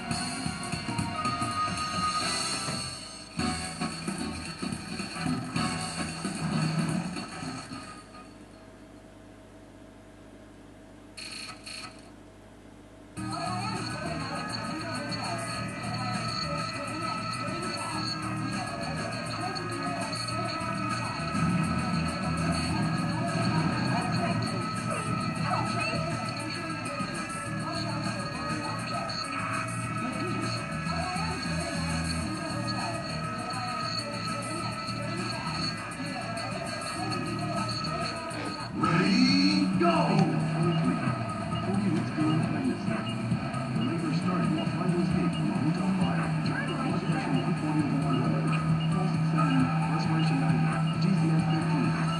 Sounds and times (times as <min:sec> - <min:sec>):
Music: 0:00.0 - 0:08.6, 0:13.2 - 0:52.1
Speech: 0:13.2 - 0:21.3, 0:22.2 - 0:43.2, 0:43.8 - 0:52.1.